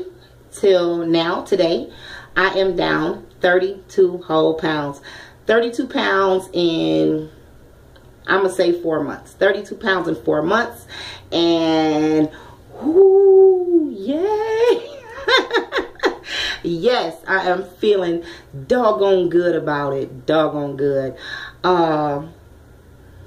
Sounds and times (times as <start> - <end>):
Speech: 0.0 - 7.3, 8.3 - 15.2, 16.7 - 22.4.